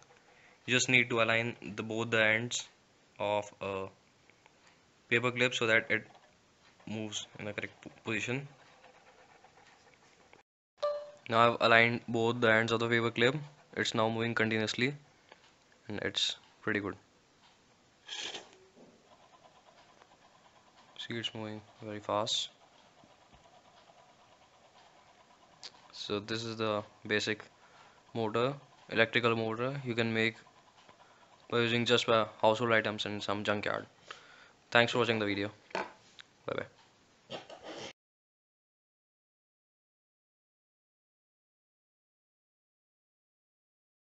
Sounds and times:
Inside, small room: 0.0 - 38.0
Speech: 0.7 - 4.0, 5.1 - 6.1, 6.9 - 8.5, 11.3 - 15.0, 15.9 - 17.0, 21.0 - 22.6, 26.0 - 27.5, 28.2 - 30.4, 31.5 - 33.9, 34.8 - 35.6, 36.5 - 36.8.

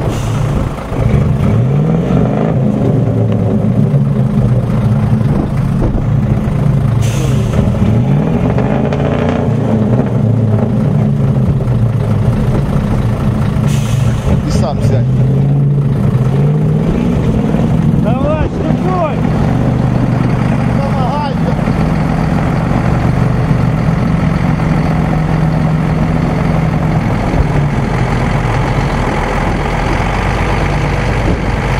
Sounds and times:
Truck: 0.0 - 31.7
Speech: 18.0 - 19.2, 20.8 - 21.6.

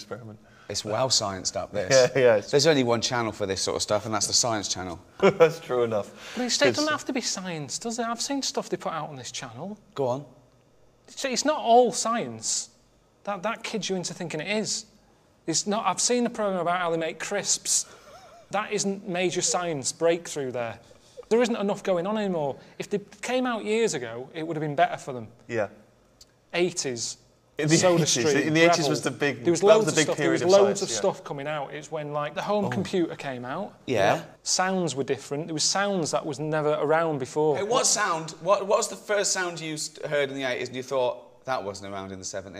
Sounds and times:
Speech: 0.0 - 10.4, 26.6 - 42.6.

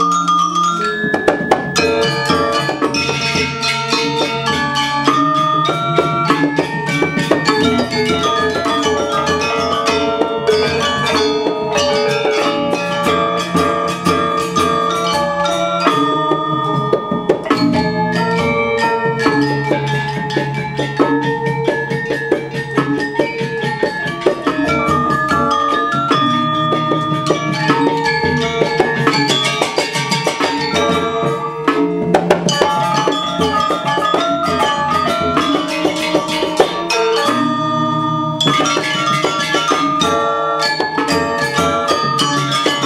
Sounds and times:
Classical music: 0.0 - 22.4, 23.0 - 42.8.

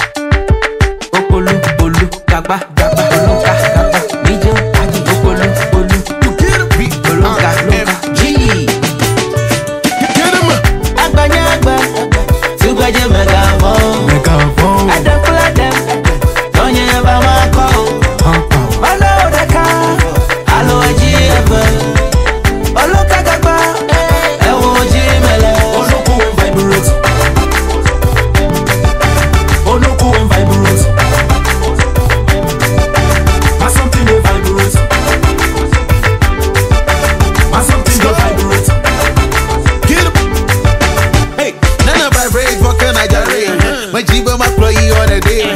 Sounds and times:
Dance music: 0.0 - 45.5.

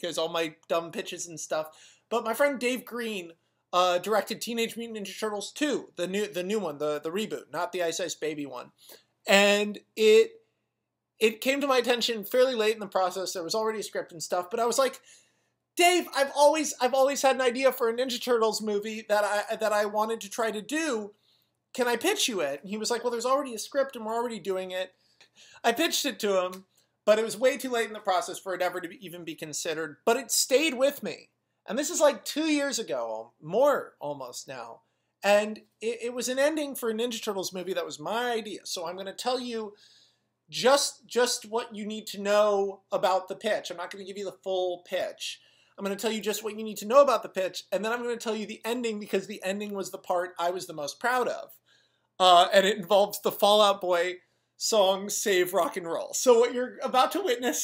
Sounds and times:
Speech: 0.0 - 10.4, 11.2 - 15.0, 15.8 - 21.1, 21.8 - 24.9, 25.6 - 39.8, 40.5 - 51.6, 52.2 - 57.6.

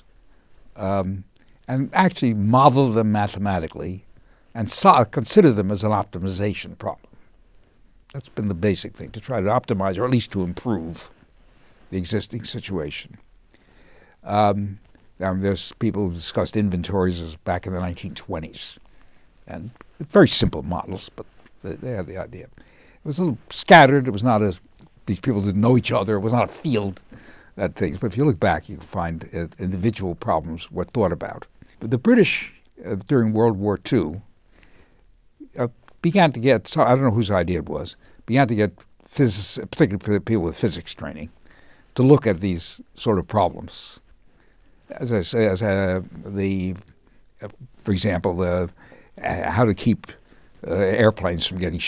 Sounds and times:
Speech: 0.8 - 7.1, 8.1 - 11.2, 11.9 - 13.2, 14.2 - 18.8, 19.5 - 34.3, 35.4 - 41.4, 42.0 - 44.1, 44.9 - 51.8.

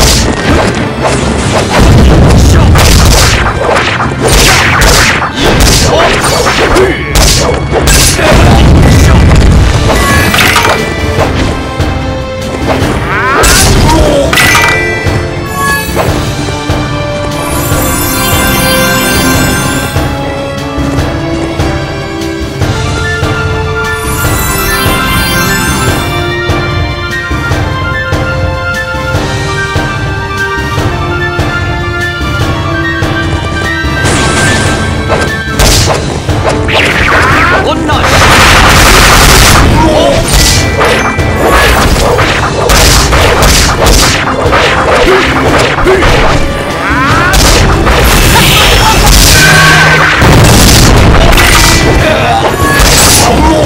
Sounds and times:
Theme music: 0.0 - 53.6.

